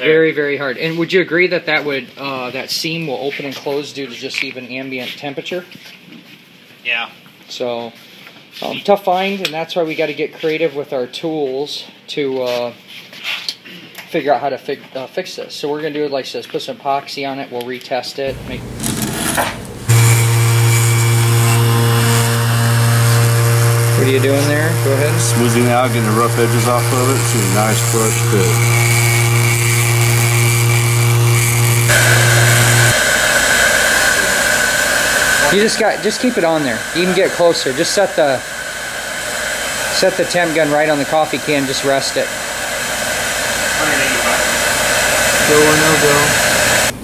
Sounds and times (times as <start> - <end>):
Speech: 0.0 - 5.7, 6.8 - 8.0, 8.6 - 12.8, 13.7 - 18.4, 24.0 - 28.6, 35.4 - 38.4, 39.9 - 42.3, 43.8 - 44.6, 45.4 - 46.4
Power tool: 18.3 - 47.0.